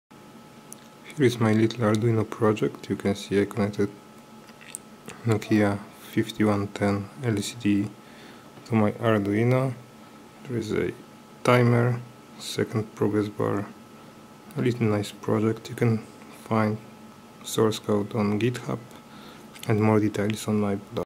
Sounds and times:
Speech: 1.1 - 4.0, 5.1 - 8.0, 8.6 - 13.8, 14.5 - 18.9, 19.6 - 21.0.

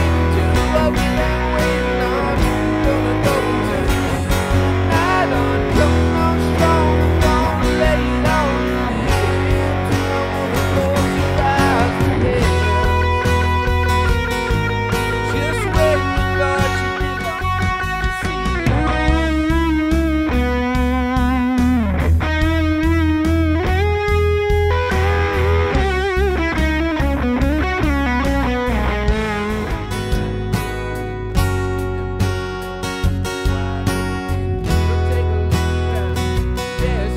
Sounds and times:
Electric guitar: 0.0 - 37.1.

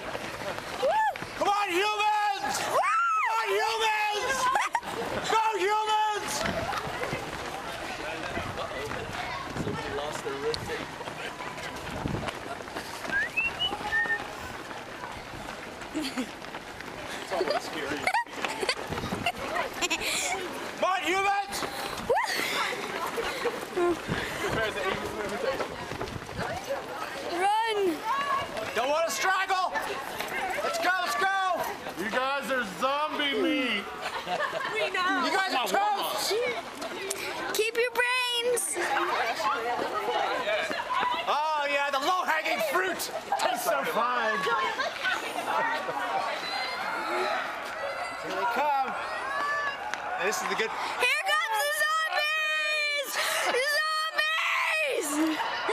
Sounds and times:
Outside, urban or manmade: 0.0 - 55.7
Run: 0.0 - 55.7.

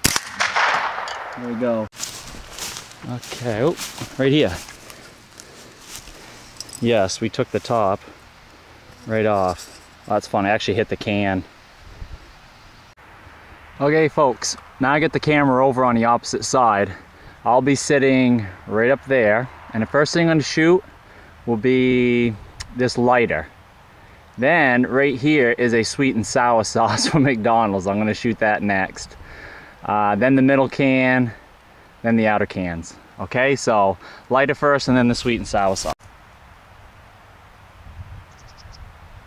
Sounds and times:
Speech: 1.4 - 1.9, 3.0 - 4.7, 6.8 - 8.1, 9.0 - 11.5, 13.8 - 20.9, 21.5 - 23.5, 24.4 - 29.2, 29.9 - 31.4, 32.0 - 36.0.

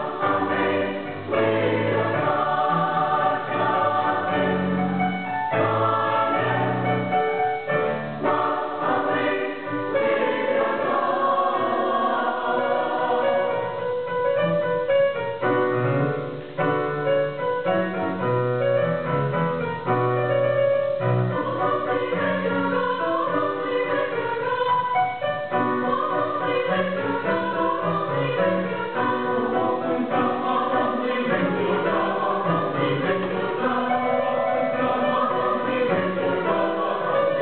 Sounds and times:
Choir: 0.0 - 16.3, 19.8 - 37.4
Opera: 0.0 - 37.4.

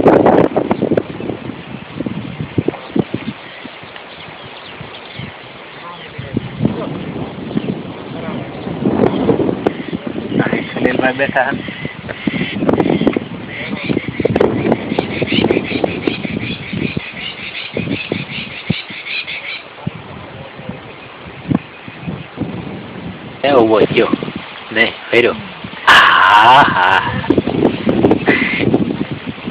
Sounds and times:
Speech: 23.4 - 25.5.

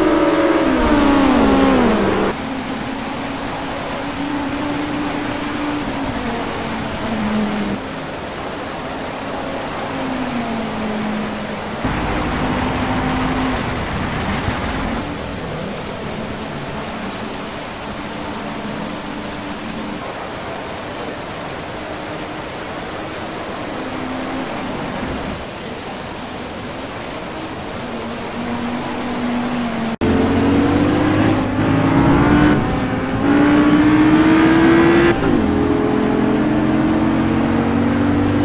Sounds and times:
Race car, auto racing: 0.0 - 38.4
Rain: 0.0 - 38.4.

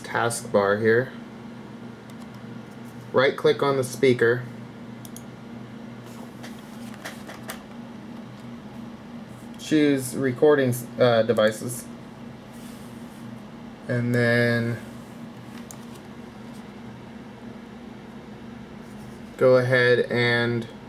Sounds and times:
Speech: 0.0 - 1.2, 3.1 - 4.5, 9.6 - 11.9, 13.9 - 14.9, 19.4 - 20.8.

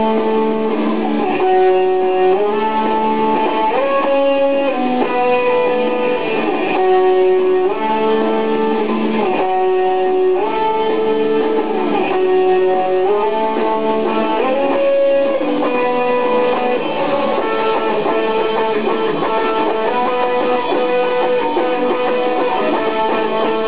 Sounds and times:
Music: 0.0 - 23.6.

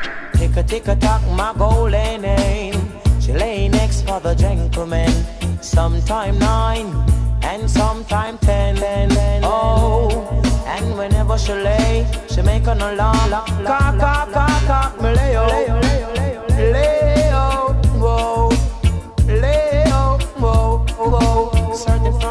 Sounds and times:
Music: 0.3 - 22.3.

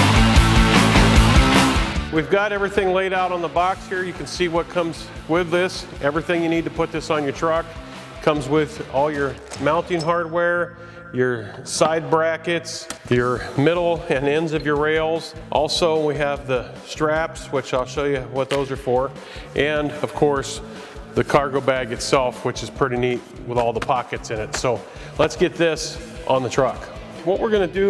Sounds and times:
Music: 0.0 - 27.9
Speech: 2.1 - 20.6, 21.2 - 27.9.

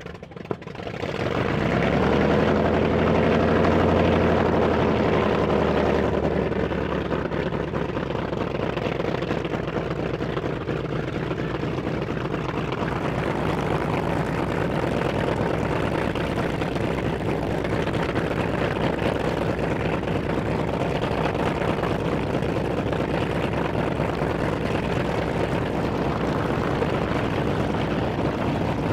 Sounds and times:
Fixed-wing aircraft, airplane: 0.0 - 28.9
Helicopter: 0.0 - 28.9.

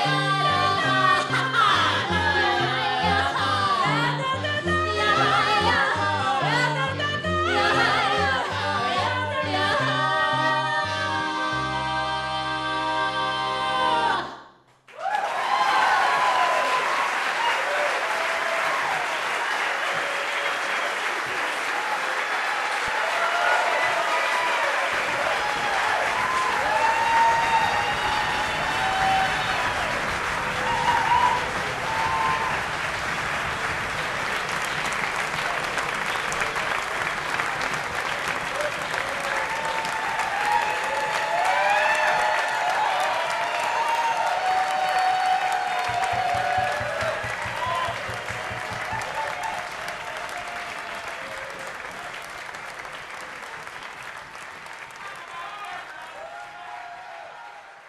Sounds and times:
Music: 0.0 - 14.6, 44.6 - 49.3
Applause: 14.9 - 57.8.

